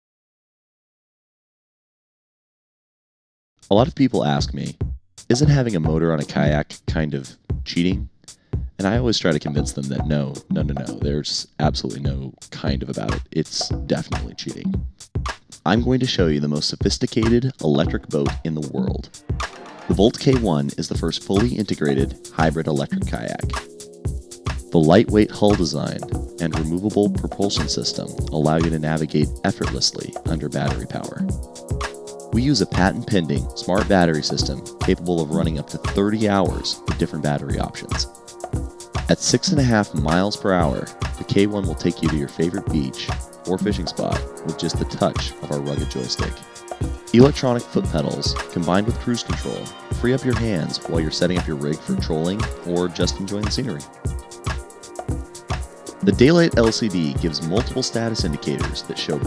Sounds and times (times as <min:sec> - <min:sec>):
Music: 0:03.6 - 0:59.2
Speech: 0:03.7 - 0:08.1, 0:08.8 - 0:14.8, 0:15.6 - 0:19.1, 0:19.9 - 0:23.6, 0:24.7 - 0:31.3, 0:32.4 - 0:38.1, 0:39.1 - 0:46.4, 0:47.1 - 0:53.9, 0:56.0 - 0:59.2.